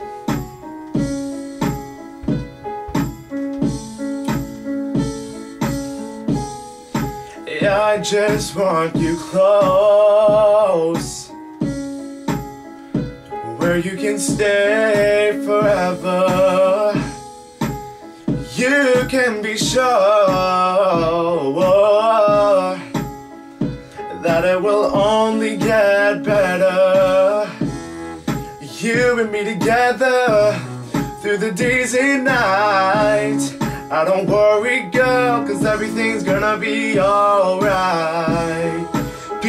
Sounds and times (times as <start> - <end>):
Music: 0.0 - 39.4
Male singing: 7.5 - 11.4, 13.4 - 17.2, 18.5 - 23.0, 24.1 - 27.6, 28.6 - 30.6, 31.2 - 39.4.